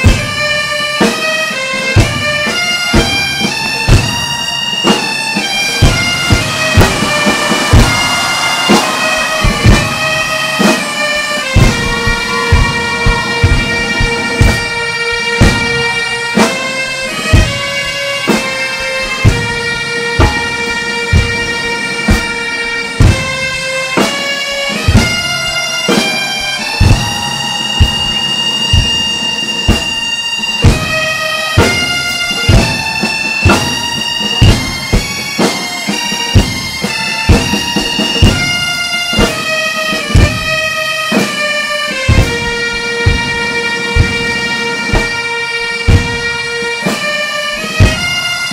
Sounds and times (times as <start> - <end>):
Drum: 5.7 - 14.8, 24.7 - 31.0.